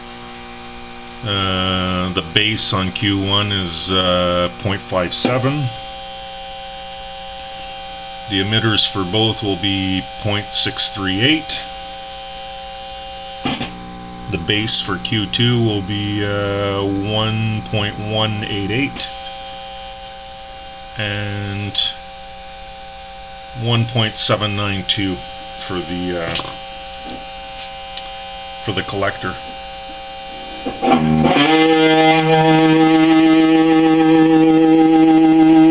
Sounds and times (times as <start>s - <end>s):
Hum: 0.0s - 35.7s
Mains hum: 0.0s - 35.7s.